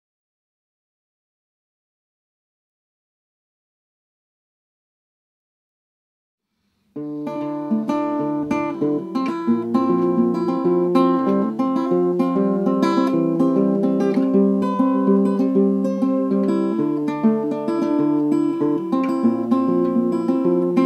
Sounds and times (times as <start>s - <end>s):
Inside, small room: 6.4s - 20.8s
Acoustic guitar: 6.8s - 20.8s.